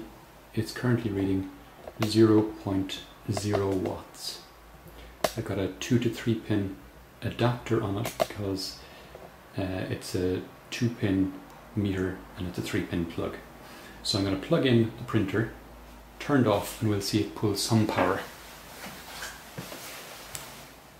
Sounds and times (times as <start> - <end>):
Speech: 0.0 - 4.5, 5.3 - 8.8, 9.5 - 15.6, 16.2 - 18.3.